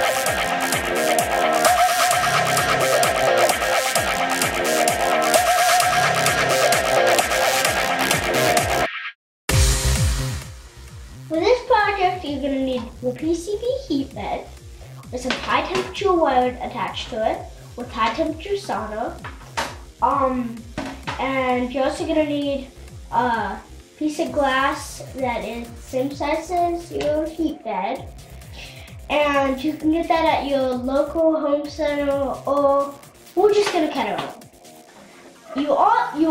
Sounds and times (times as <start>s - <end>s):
Music: 0.0s - 8.9s, 9.5s - 36.3s.